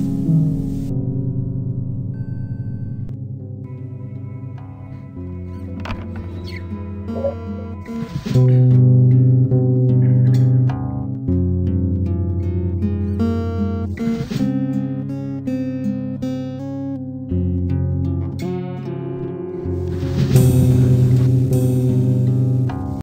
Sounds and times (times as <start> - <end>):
Music: 0.0 - 23.0.